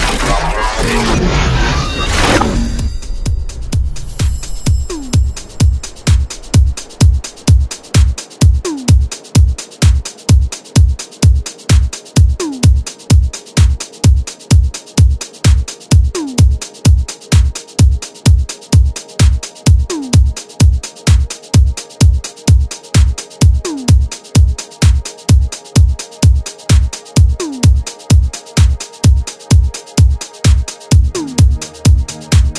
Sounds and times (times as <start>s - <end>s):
House music: 0.0s - 1.3s, 2.3s - 32.5s.